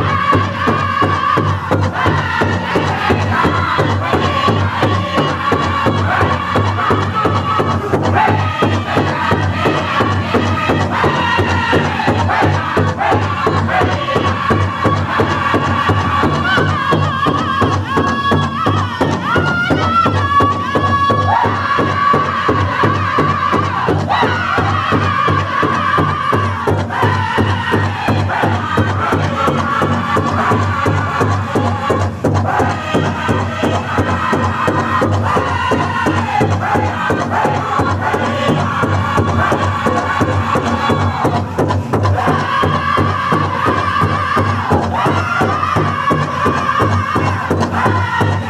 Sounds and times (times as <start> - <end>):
Music: 0.0 - 48.5.